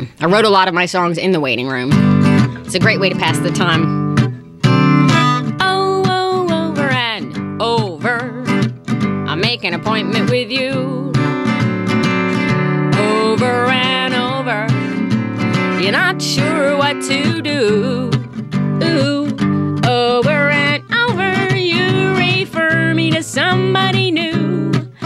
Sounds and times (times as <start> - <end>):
Music: 1.8 - 25.0.